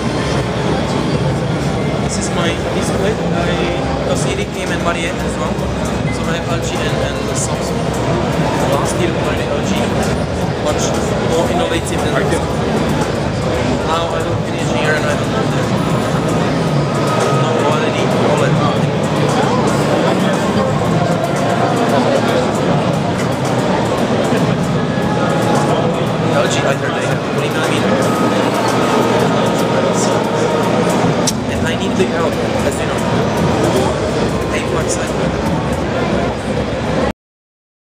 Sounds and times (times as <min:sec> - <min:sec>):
Speech: 0:00.0 - 0:37.1.